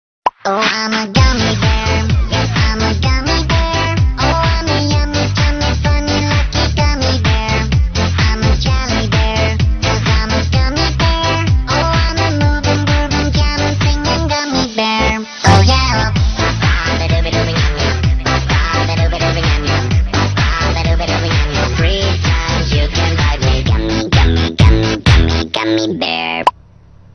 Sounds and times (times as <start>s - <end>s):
Music: 0.4s - 26.0s.